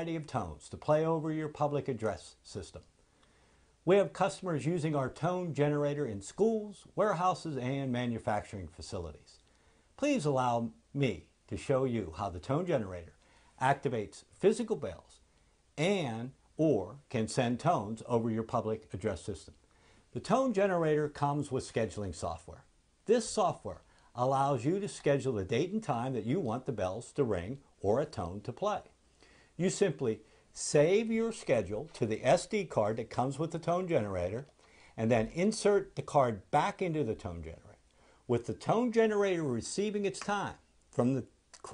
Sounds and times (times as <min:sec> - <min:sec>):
Speech: 0:00.0 - 0:02.9, 0:03.8 - 0:09.4, 0:10.0 - 0:15.2, 0:15.8 - 0:29.0, 0:29.6 - 0:41.7.